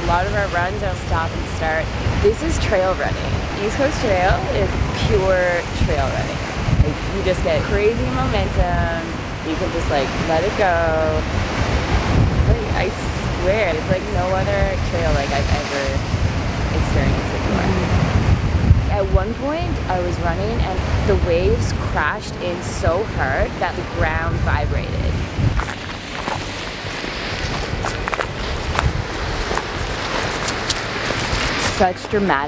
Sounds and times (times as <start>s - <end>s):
Speech: 0.0s - 11.2s, 12.5s - 16.0s, 16.8s - 18.0s, 18.9s - 25.2s, 31.8s - 32.4s
Outside, rural or natural: 0.0s - 32.4s.